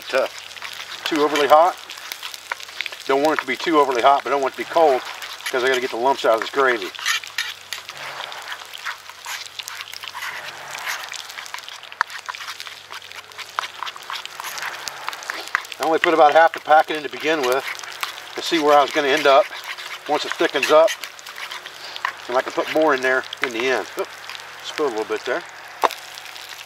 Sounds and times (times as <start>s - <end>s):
Outside, rural or natural: 0.0s - 26.6s
Speech: 1.1s - 1.8s, 3.1s - 6.9s, 15.8s - 17.6s, 18.4s - 19.5s, 20.1s - 20.9s, 22.3s - 24.0s, 24.6s - 25.4s.